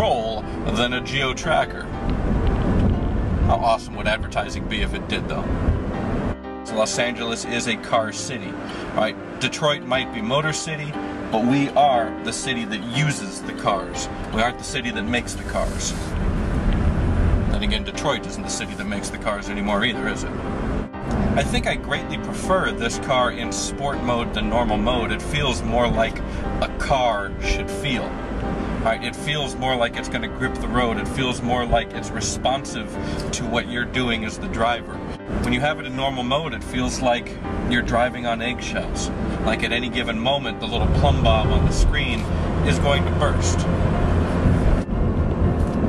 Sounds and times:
Speech: 0.0 - 1.9, 3.5 - 5.5, 6.7 - 16.1, 17.5 - 20.3, 21.4 - 28.1, 28.8 - 43.7
Car: 0.0 - 45.8
Music: 0.0 - 45.8.

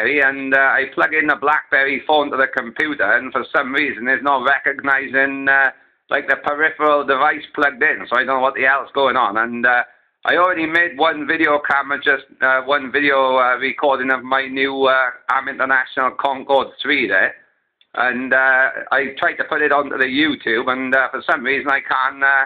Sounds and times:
Speech: 0.0 - 17.4, 18.0 - 22.4.

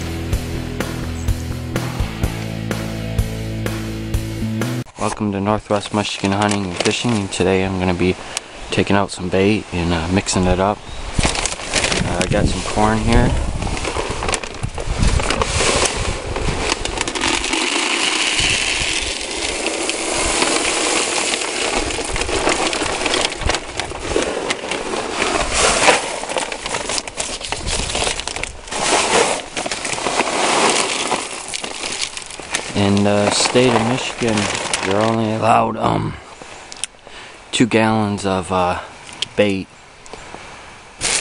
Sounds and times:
Speech: 5.0 - 10.8, 12.0 - 13.4, 32.7 - 36.3, 37.5 - 39.7.

